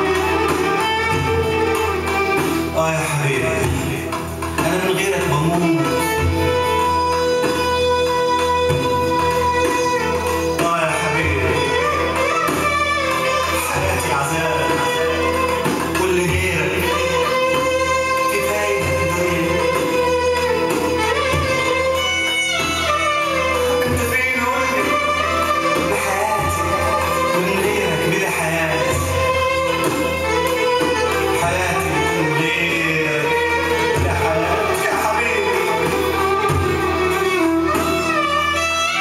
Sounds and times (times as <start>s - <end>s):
Music: 0.0s - 39.0s.